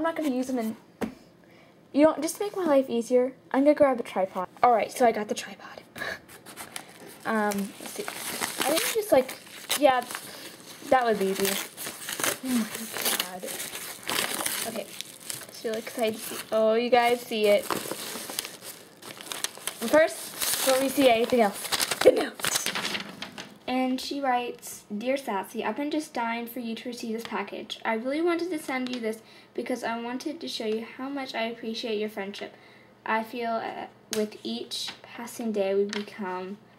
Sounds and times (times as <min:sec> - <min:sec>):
Speech: 0:00.0 - 0:00.8, 0:02.0 - 0:05.8, 0:07.2 - 0:10.1, 0:10.9 - 0:11.6, 0:15.6 - 0:17.7, 0:19.8 - 0:22.6, 0:23.7 - 0:36.6
Inside, small room: 0:00.0 - 0:36.7.